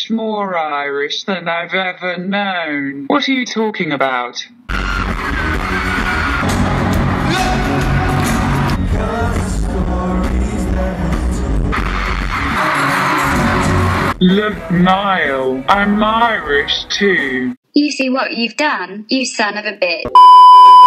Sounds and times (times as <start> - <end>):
Pop music: 4.7 - 14.9
Singing: 7.3 - 14.1.